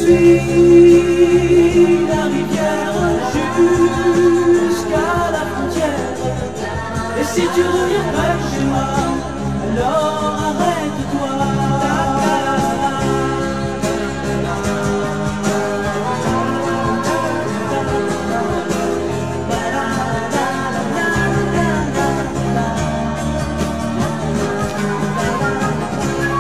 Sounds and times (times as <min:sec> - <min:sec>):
Country: 0:00.0 - 0:26.4
Singing: 0:00.0 - 0:26.4.